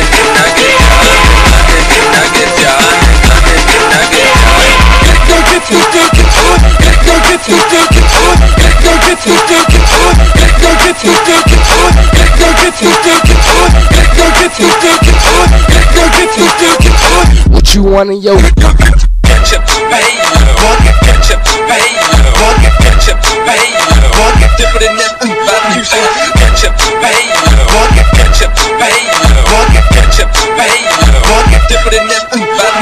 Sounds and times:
Music: 0.0s - 32.8s.

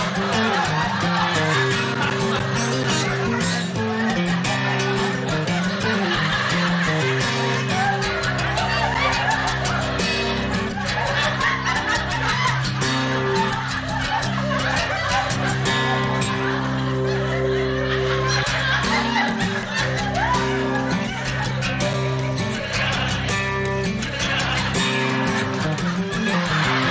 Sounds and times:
Music: 0.0s - 26.9s.

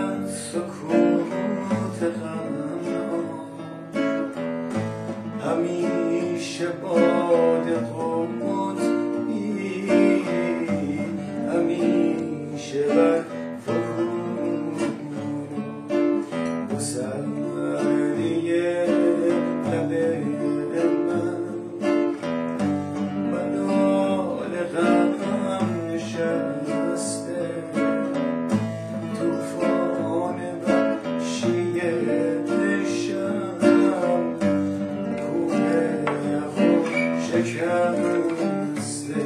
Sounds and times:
Male singing: 0.0s - 4.3s, 5.2s - 39.2s
Music: 0.0s - 39.2s.

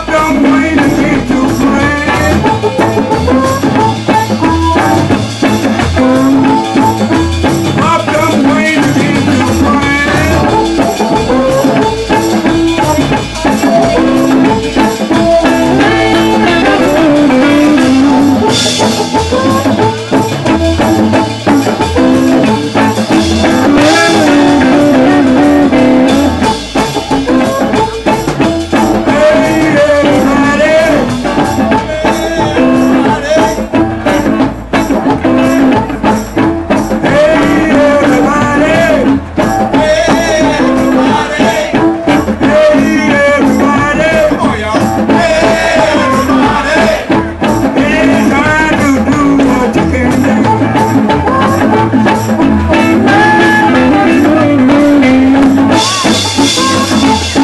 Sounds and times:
Jazz: 0.0s - 57.4s.

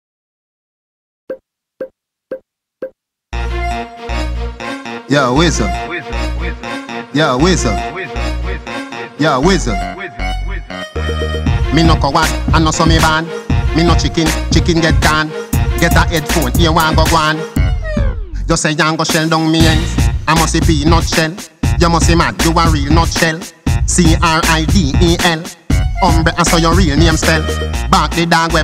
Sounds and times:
Music: 3.4s - 28.6s.

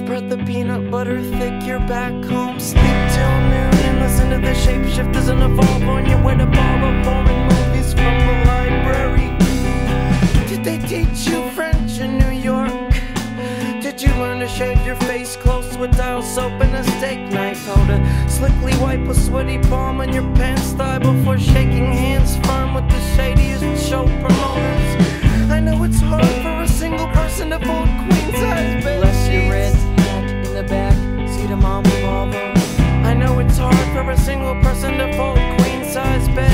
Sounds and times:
Music: 0.0s - 36.5s.

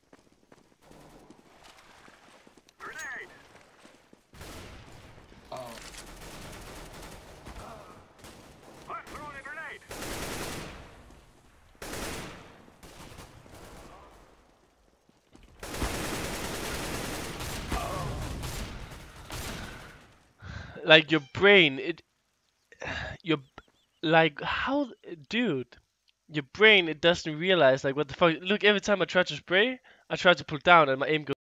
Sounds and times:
Speech: 2.8s - 3.4s, 8.9s - 9.9s, 20.8s - 22.0s, 23.2s - 31.4s.

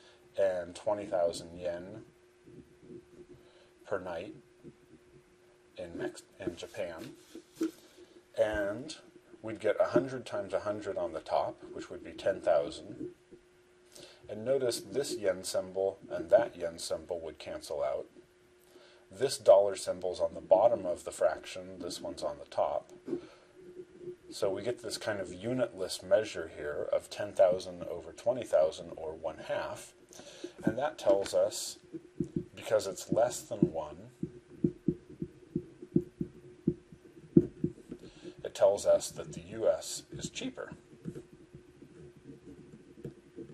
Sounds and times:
Inside, small room: 0.0s - 43.5s
Speech: 0.4s - 2.1s, 3.9s - 4.4s, 5.8s - 7.2s, 8.4s - 13.1s, 14.3s - 18.1s, 19.1s - 23.0s, 24.3s - 30.0s, 30.6s - 31.8s, 32.6s - 34.2s, 38.4s - 40.8s.

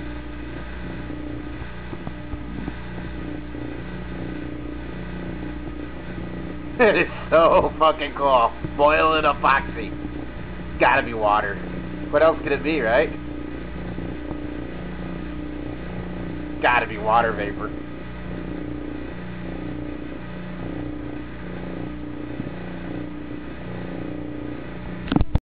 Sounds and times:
Speech: 6.8s - 10.0s, 10.8s - 13.2s, 16.6s - 17.8s.

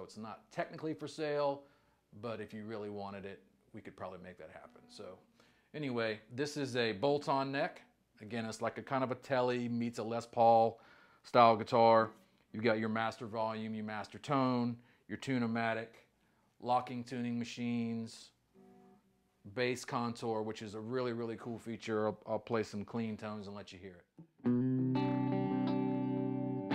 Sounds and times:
Speech: 0.0s - 18.4s, 19.5s - 24.1s
Music: 24.2s - 26.7s.

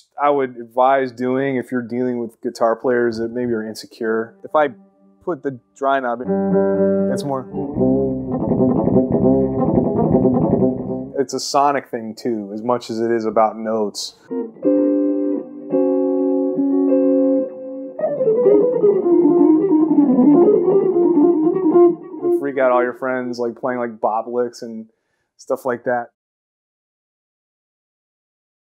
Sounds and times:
Speech: 0.0s - 6.3s, 7.1s - 7.5s, 11.2s - 14.2s, 22.3s - 26.2s
Bass guitar: 4.5s - 11.2s, 14.2s - 23.2s.

